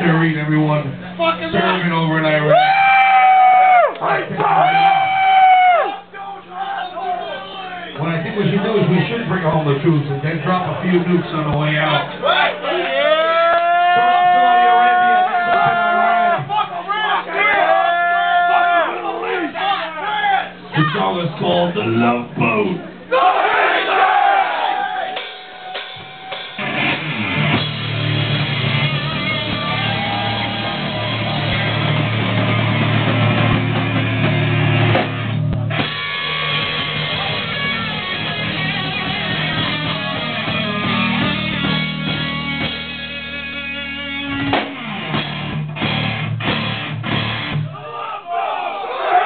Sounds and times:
Speech: 0:06.2 - 0:13.1, 0:19.0 - 0:23.0.

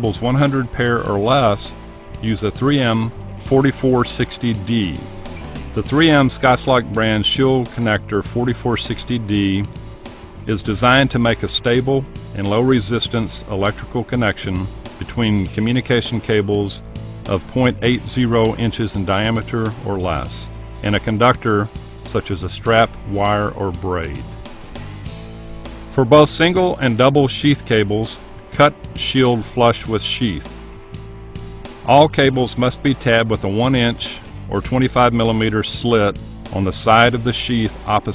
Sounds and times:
Speech: 0:00.0 - 0:05.1, 0:05.8 - 0:09.7, 0:10.5 - 0:24.3, 0:26.0 - 0:30.5, 0:31.8 - 0:38.1
Music: 0:00.0 - 0:38.1.

